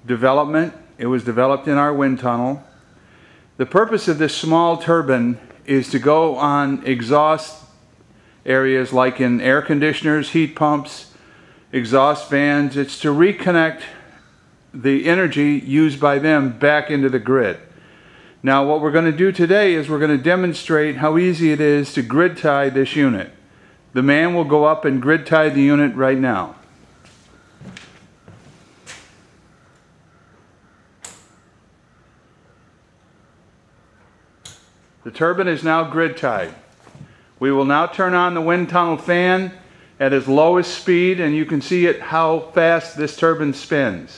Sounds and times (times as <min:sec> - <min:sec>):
Speech: 0:00.0 - 0:02.7, 0:03.6 - 0:07.7, 0:08.4 - 0:14.1, 0:14.8 - 0:17.7, 0:18.4 - 0:23.4, 0:24.0 - 0:26.6, 0:35.0 - 0:36.7, 0:37.4 - 0:44.1.